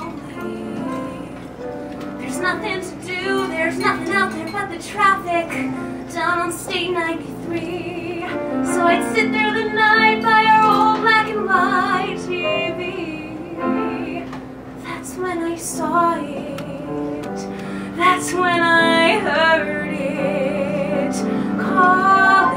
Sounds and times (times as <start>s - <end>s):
Female singing: 0.0s - 1.5s, 2.2s - 22.5s
Music: 0.0s - 22.5s.